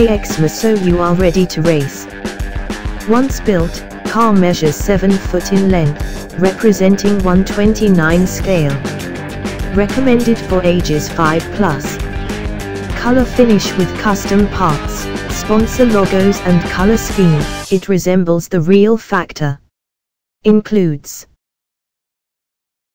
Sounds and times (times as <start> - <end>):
Speech: 0.0 - 2.1, 3.0 - 8.9, 9.7 - 12.0, 13.0 - 19.7, 20.4 - 21.4
Music: 0.0 - 17.9.